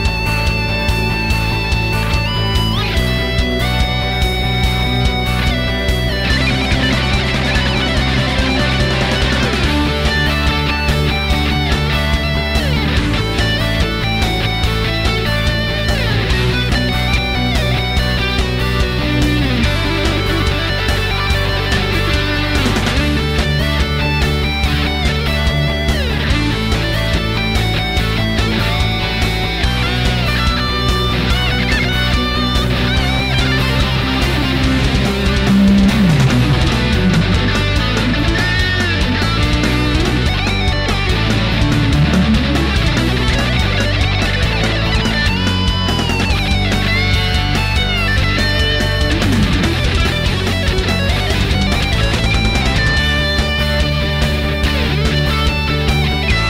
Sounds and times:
Electric guitar: 0:00.0 - 0:56.4.

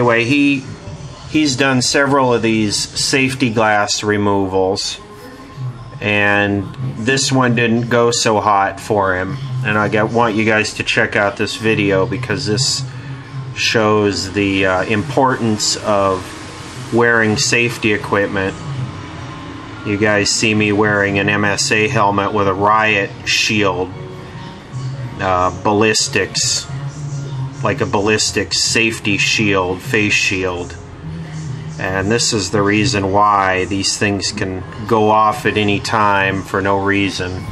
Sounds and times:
Speech: 0:00.0 - 0:05.1, 0:06.0 - 0:13.0, 0:13.6 - 0:18.6, 0:19.8 - 0:24.0, 0:25.2 - 0:26.7, 0:27.6 - 0:30.8, 0:31.8 - 0:37.5.

